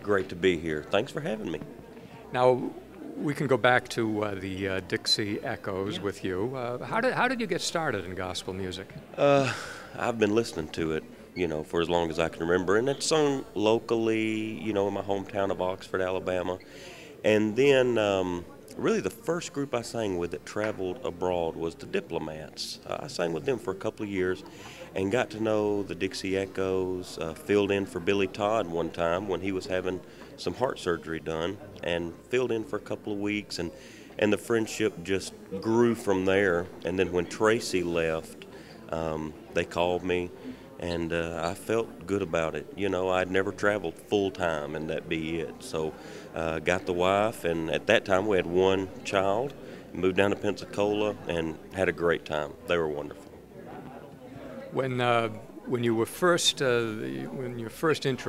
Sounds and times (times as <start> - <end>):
Speech: 0.0 - 9.4, 10.0 - 16.6, 17.2 - 58.2.